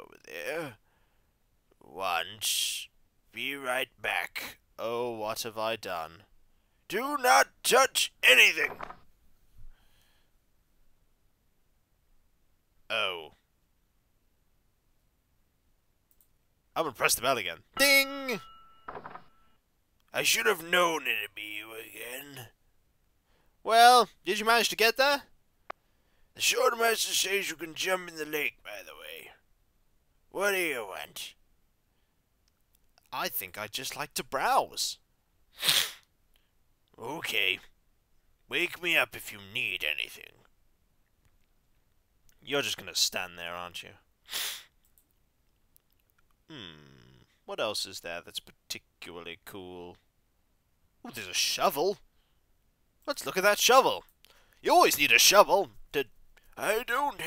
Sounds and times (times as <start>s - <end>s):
Speech: 0.0s - 0.8s, 1.8s - 6.3s, 6.9s - 8.9s, 12.9s - 13.4s, 16.8s - 18.4s, 20.1s - 22.6s, 23.6s - 25.3s, 26.4s - 29.4s, 30.3s - 31.4s, 33.0s - 35.0s, 37.0s - 37.7s, 38.5s - 40.5s, 42.4s - 44.0s, 46.5s - 50.0s, 51.1s - 52.0s, 53.1s - 57.2s.